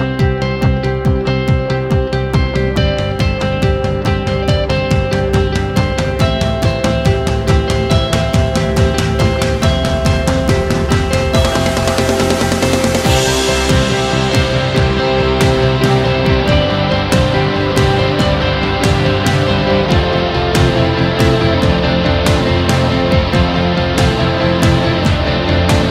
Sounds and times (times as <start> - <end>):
Music: 0.0 - 25.9.